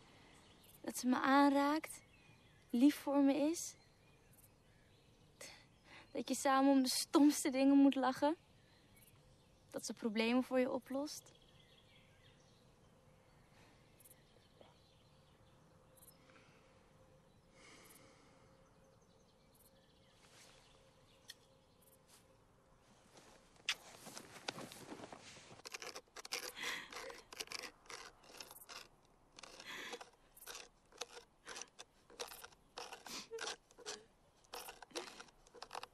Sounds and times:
Outside, rural or natural: 0.0s - 35.9s
Scrape: 23.0s - 35.9s.

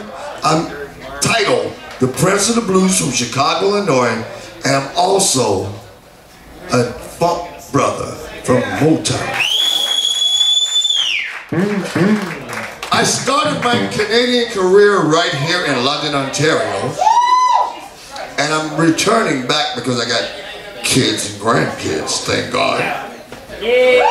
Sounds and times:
Speech: 0.0s - 9.4s, 11.6s - 17.0s, 17.8s - 24.1s.

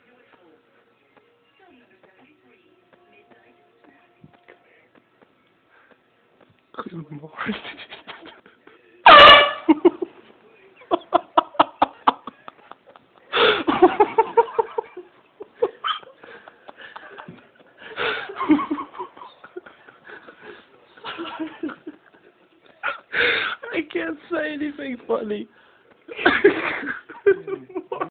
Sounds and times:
Inside, small room: 0.0s - 28.1s
Speech: 23.7s - 25.5s.

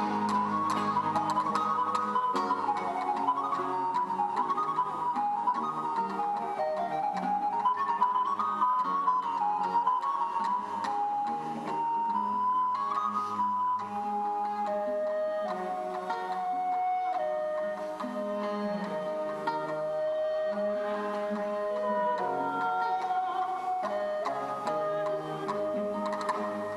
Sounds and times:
Bowed string instrument: 0.0s - 26.7s
Classical music: 0.0s - 26.7s.

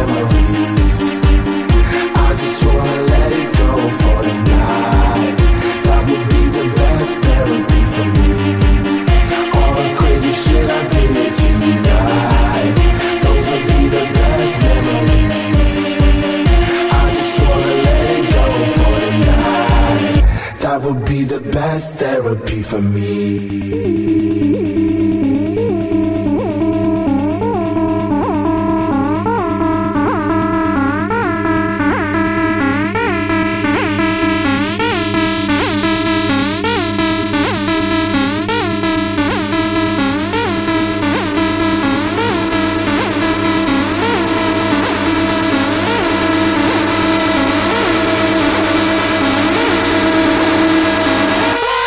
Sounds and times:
Electronica: 0.0s - 51.8s
House music: 0.0s - 51.8s.

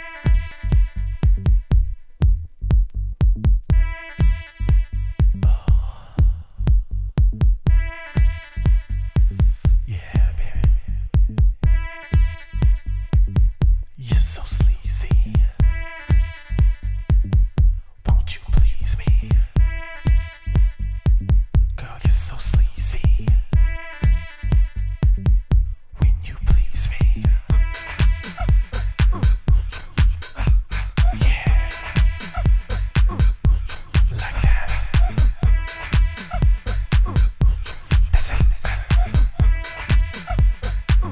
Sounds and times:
House music: 0.0s - 17.7s, 18.6s - 25.8s, 26.6s - 41.1s.

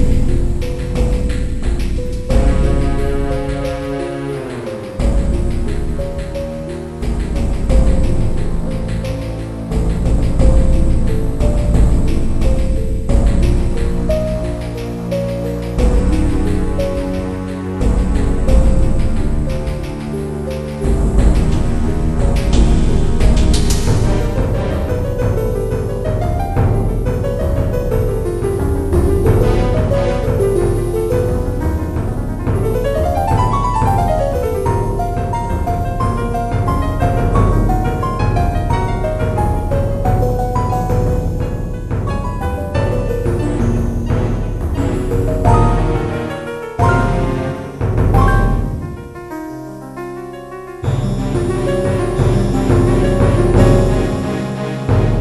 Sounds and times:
Theme music: 0.0s - 55.2s.

